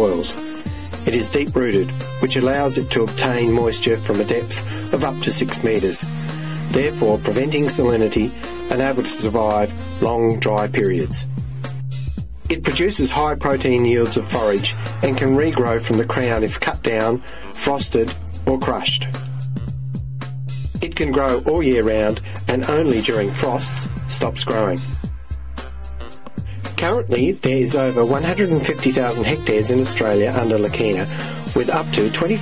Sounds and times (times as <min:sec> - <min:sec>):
Speech: 0:00.0 - 0:00.4, 0:01.1 - 0:06.1, 0:06.7 - 0:11.3, 0:12.5 - 0:19.2, 0:20.8 - 0:24.9, 0:26.8 - 0:32.4
Music: 0:00.0 - 0:32.4.